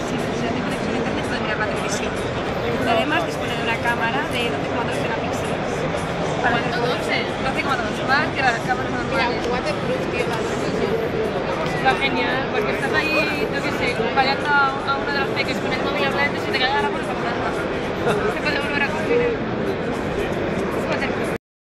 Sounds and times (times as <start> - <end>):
Speech: 0.0 - 19.4.